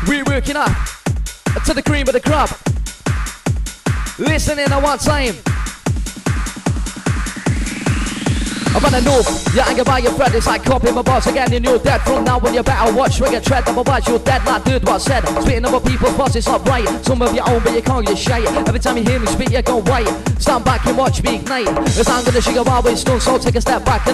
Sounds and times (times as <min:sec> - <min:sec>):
Music: 0:00.0 - 0:24.1.